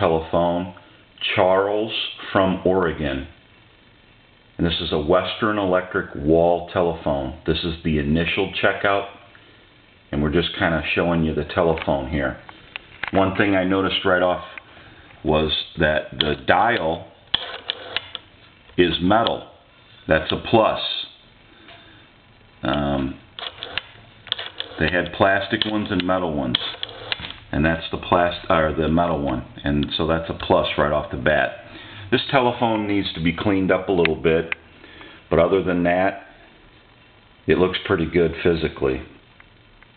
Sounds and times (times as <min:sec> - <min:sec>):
Speech: 0:00.0 - 0:03.4, 0:04.6 - 0:09.3, 0:10.1 - 0:12.5, 0:13.1 - 0:14.6, 0:15.2 - 0:17.2, 0:18.8 - 0:21.2, 0:22.6 - 0:23.3, 0:24.8 - 0:26.6, 0:27.5 - 0:34.6, 0:35.3 - 0:36.3, 0:37.5 - 0:39.2
Telephone: 0:17.3 - 0:18.3, 0:23.4 - 0:27.3.